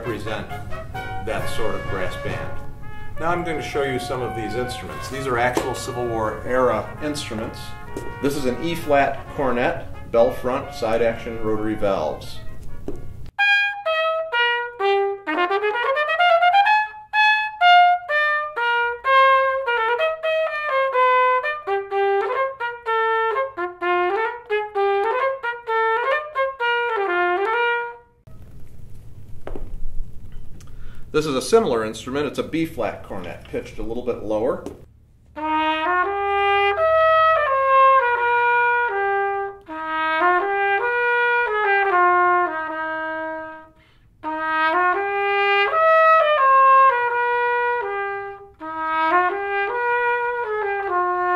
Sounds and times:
Speech: 0.0 - 0.5, 1.3 - 2.6, 3.2 - 12.5, 31.2 - 34.8
Trumpet: 0.0 - 28.4, 35.3 - 51.3
Jazz: 0.0 - 51.3.

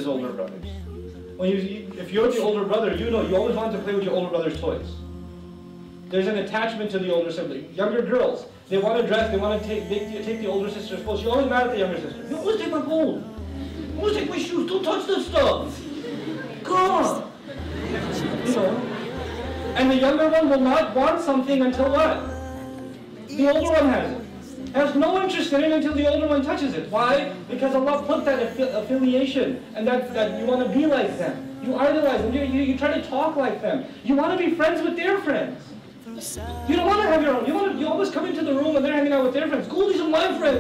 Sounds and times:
Speech: 0.0 - 5.0, 6.1 - 40.6
Music: 0.0 - 40.6
Laughter: 15.8 - 16.7, 17.4 - 19.9.

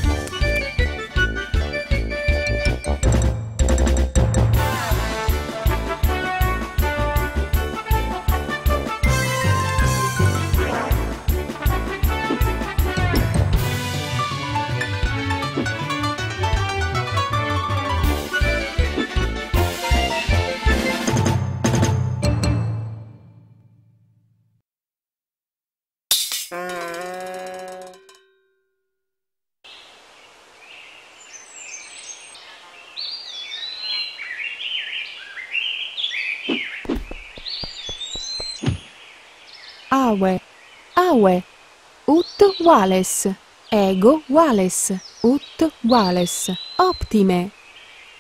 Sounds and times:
Music: 0.0 - 23.8.

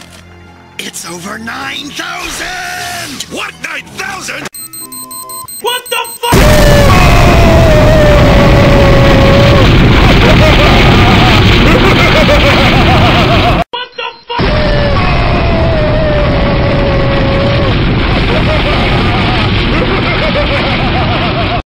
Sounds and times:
Whoop: 6.4 - 9.7, 14.4 - 17.7.

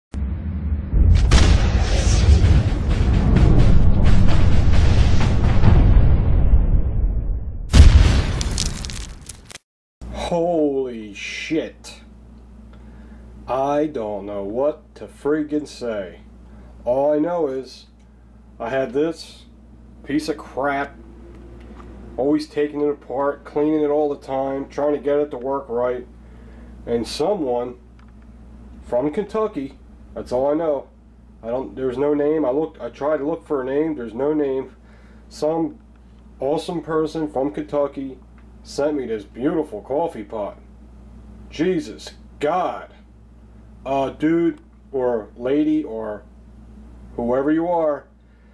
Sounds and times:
Music: 2.3 - 6.5
Crack: 7.7 - 9.6.

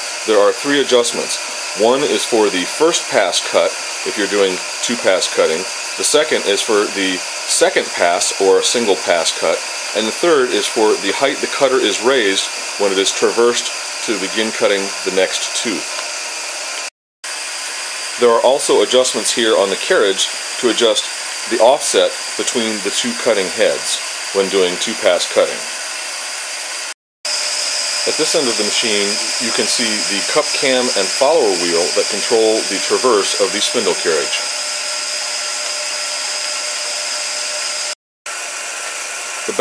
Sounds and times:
Engine: 0.0 - 39.6
Speech: 0.3 - 15.9, 18.2 - 25.7, 28.1 - 34.5.

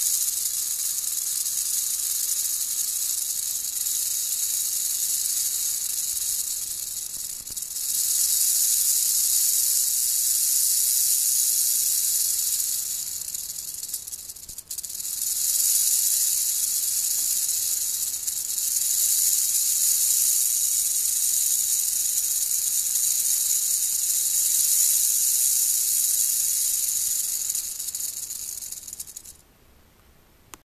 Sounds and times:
Snake: 0.0 - 29.4.

